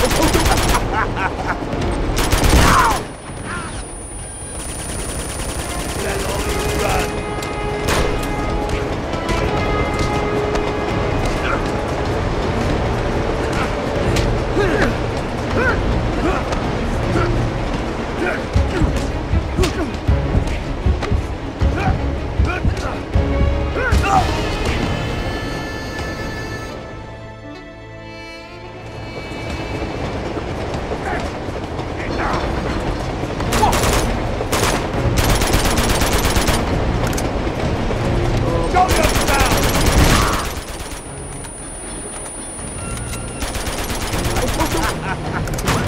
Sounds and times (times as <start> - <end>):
Music: 0.0 - 45.8.